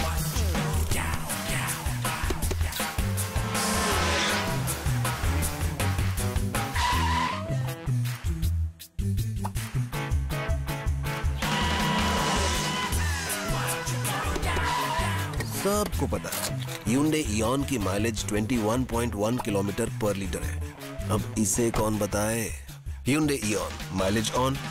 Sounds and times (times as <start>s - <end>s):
Music: 0.0s - 24.7s
Speech: 15.4s - 24.7s.